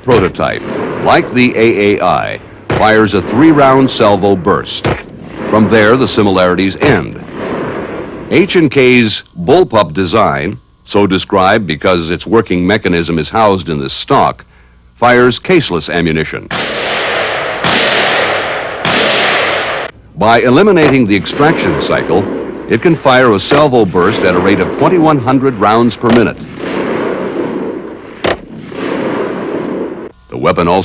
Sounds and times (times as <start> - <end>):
Speech: 0.0 - 4.9, 5.5 - 7.3, 8.3 - 16.5, 20.2 - 26.4, 30.3 - 30.8.